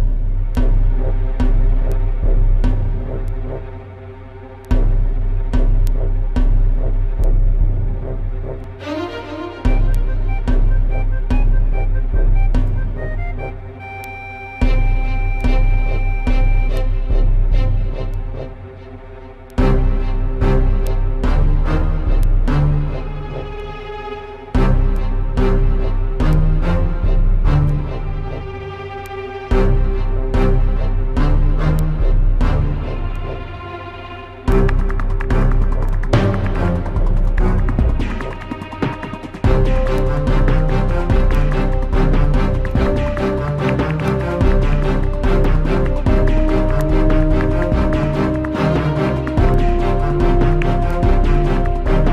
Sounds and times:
Music: 0.0s - 52.1s.

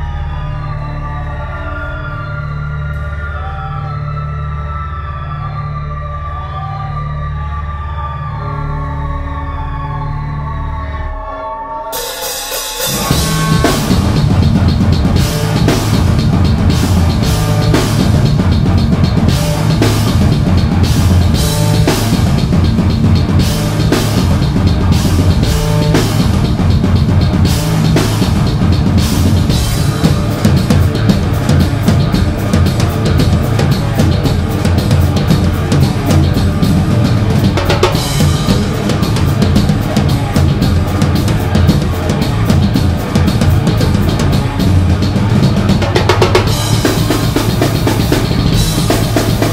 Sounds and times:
Heavy metal: 0.0s - 49.5s
Cymbal: 11.9s - 49.5s
Drum kit: 12.0s - 49.5s
Bass drum: 12.8s - 49.5s.

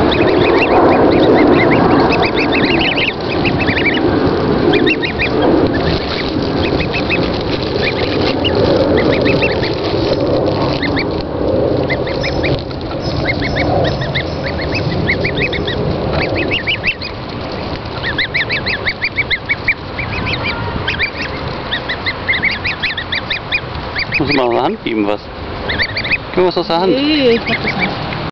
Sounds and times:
Speech: 24.2s - 25.2s, 26.4s - 27.9s.

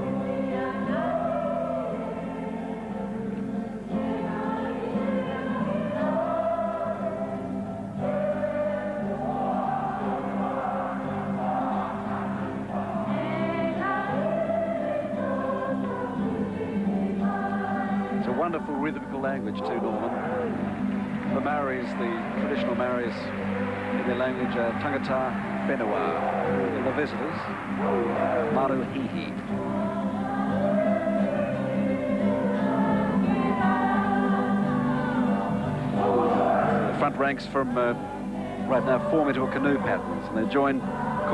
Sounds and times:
Choir: 0.0s - 41.3s.

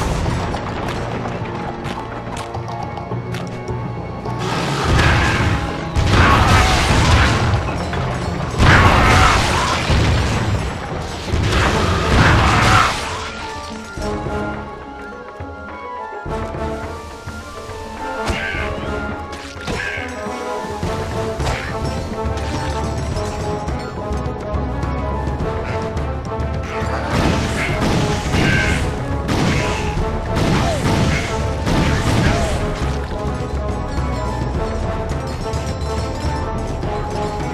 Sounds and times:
Music: 0.0s - 37.5s.

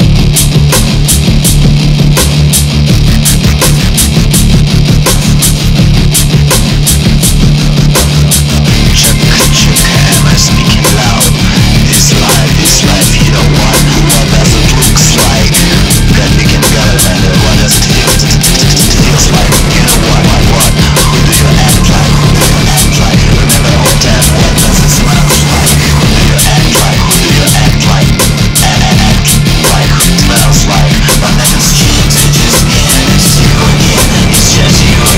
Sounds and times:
Music: 0.0s - 35.1s.

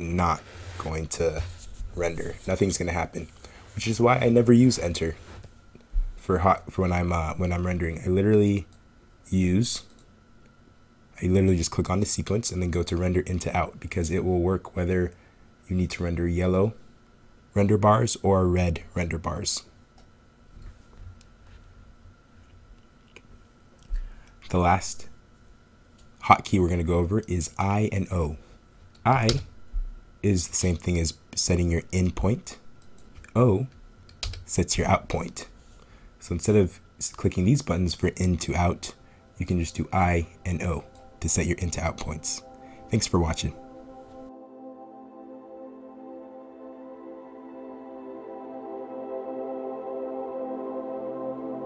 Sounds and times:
Speech: 0.0s - 5.2s, 6.2s - 8.7s, 9.3s - 9.9s, 11.2s - 16.8s, 17.6s - 19.7s, 24.4s - 25.2s, 26.2s - 28.4s, 29.0s - 29.5s, 30.2s - 32.6s, 33.3s - 33.8s, 34.5s - 35.5s, 36.2s - 43.6s
Ambient music: 38.0s - 51.6s.

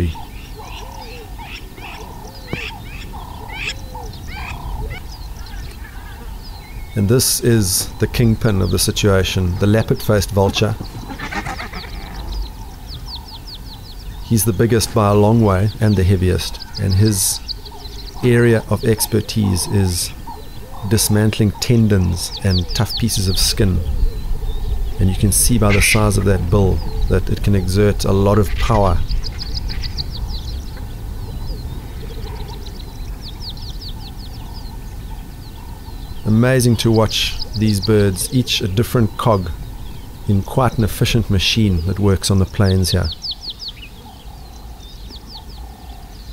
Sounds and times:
Chirp, tweet: 0.0s - 46.3s.

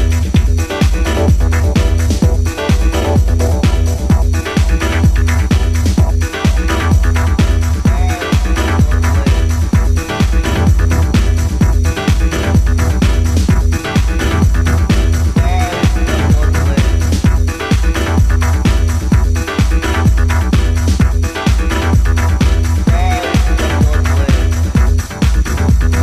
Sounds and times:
Disco: 0.0s - 26.0s
Speech: 7.8s - 9.6s, 15.4s - 17.2s, 22.9s - 24.7s.

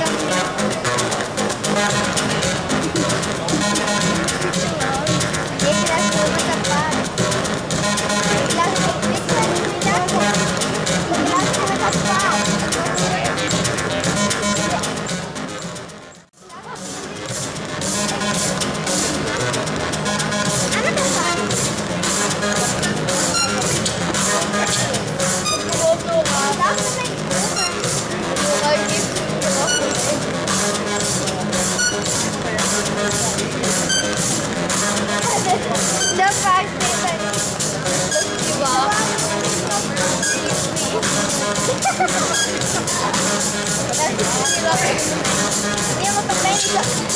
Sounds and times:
Speech: 0.0s - 15.7s, 16.3s - 47.1s
Music: 0.0s - 47.1s.

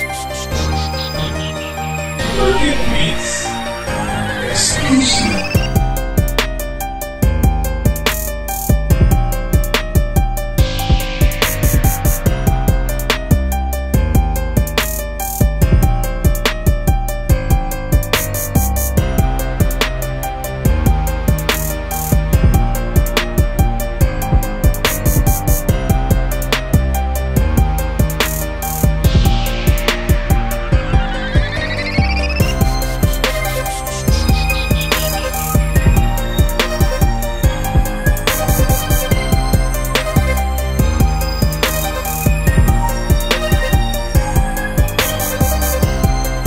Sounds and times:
Music: 0.0s - 46.4s.

